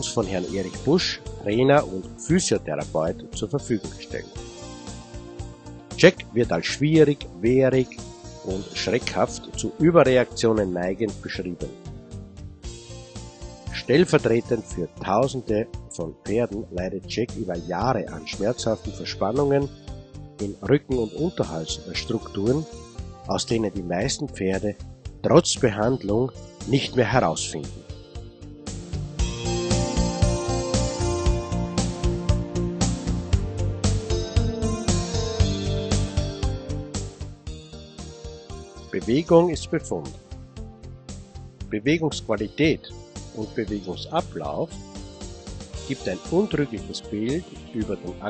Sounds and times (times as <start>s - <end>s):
Speech: 0.0s - 4.3s, 6.0s - 11.8s, 13.7s - 19.7s, 20.4s - 22.7s, 23.3s - 27.9s, 39.0s - 40.1s, 41.7s - 44.7s, 45.9s - 48.3s
Music: 0.0s - 48.3s.